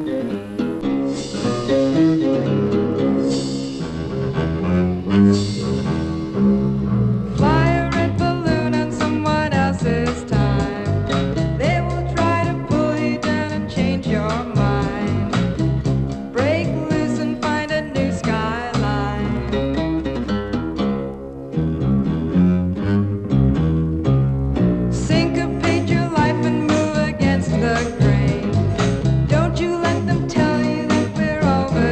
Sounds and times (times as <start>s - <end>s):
Pizzicato: 0.0s - 20.8s.